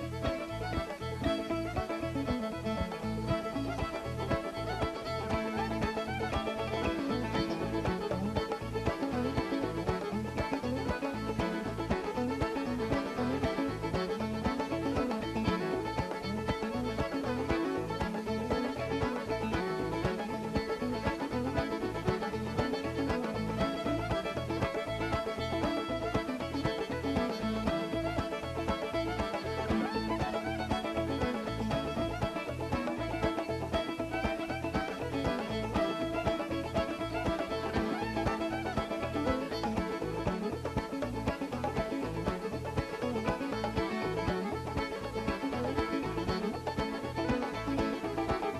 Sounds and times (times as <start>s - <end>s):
Music: 0.0s - 48.5s.